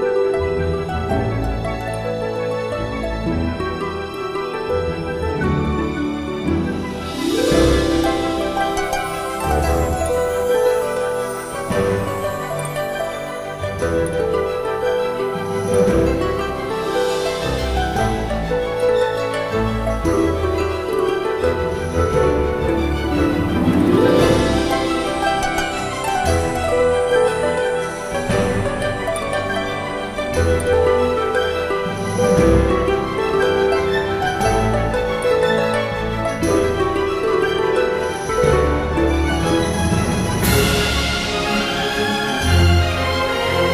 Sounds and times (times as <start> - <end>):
Music: 0.0 - 43.7.